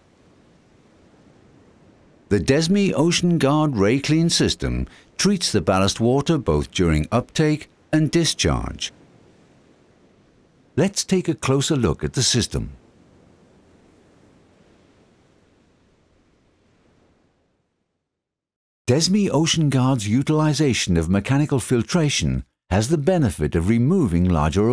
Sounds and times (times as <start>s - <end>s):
Speech: 2.3s - 8.9s, 10.8s - 12.8s, 18.9s - 24.7s.